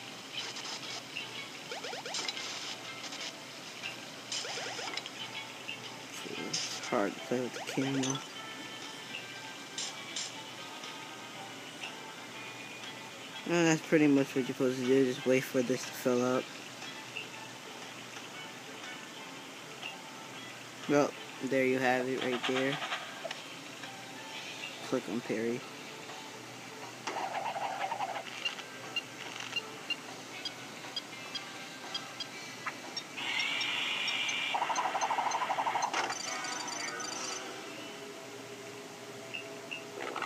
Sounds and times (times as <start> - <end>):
Music: 0.0 - 40.2
Speech: 6.2 - 8.2, 13.5 - 16.4, 20.9 - 22.8, 24.8 - 25.6.